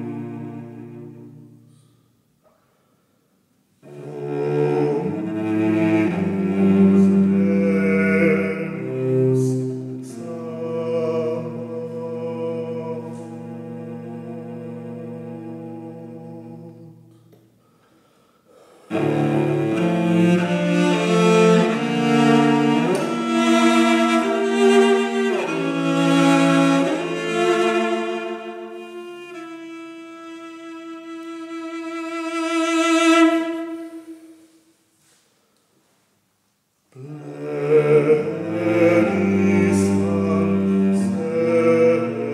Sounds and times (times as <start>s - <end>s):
Cello: 0.0s - 2.7s, 3.8s - 34.7s, 36.9s - 42.3s.